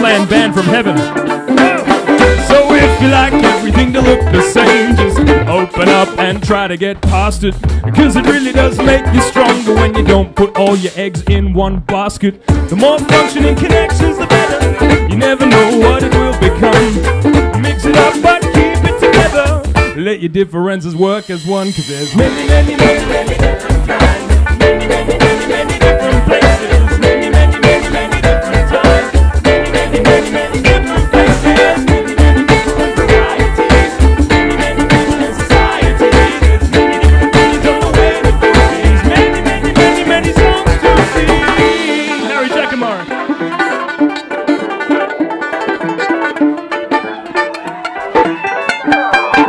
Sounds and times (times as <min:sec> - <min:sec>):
Mandolin: 0:00.0 - 0:20.2, 0:21.0 - 0:49.4
Banjo: 0:00.0 - 0:49.4
Singing: 0:12.7 - 0:19.6, 0:22.0 - 0:42.8.